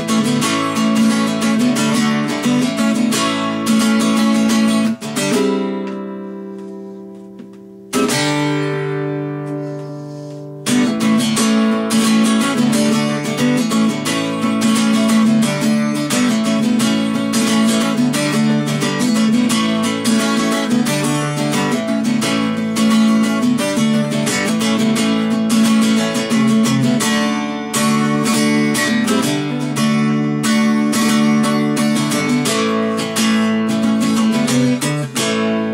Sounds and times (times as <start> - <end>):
Electric guitar: 0.0 - 35.7
Strum: 0.0 - 35.7.